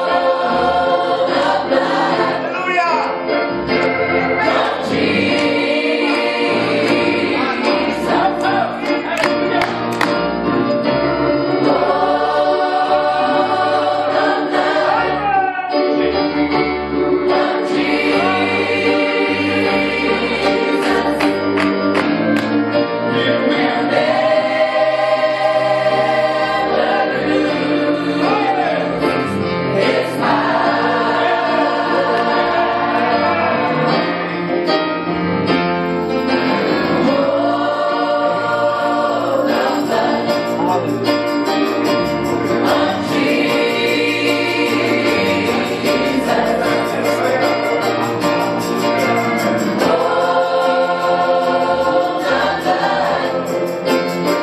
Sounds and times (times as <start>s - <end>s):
Choir: 0.0s - 2.6s, 3.6s - 10.1s, 10.8s - 34.7s, 36.4s - 41.0s, 41.6s - 54.4s.